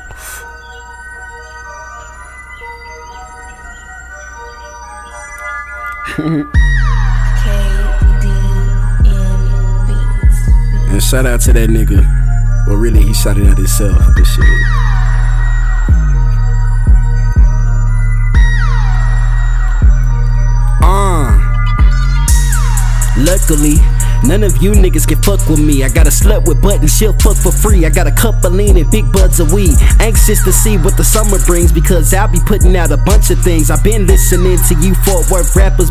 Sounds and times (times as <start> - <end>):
Hip hop music: 0.0 - 35.9.